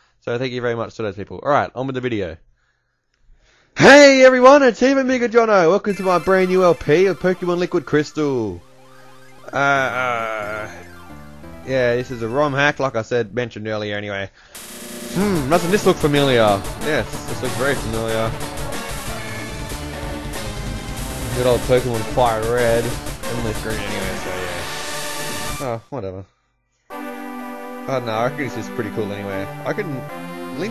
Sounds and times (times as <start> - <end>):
Speech: 0.2 - 2.4, 3.8 - 8.6, 11.7 - 14.3, 15.2 - 18.3, 21.4 - 24.6, 25.6 - 26.3, 27.9 - 30.7
Music: 5.9 - 12.8, 14.6 - 25.8, 26.7 - 30.7.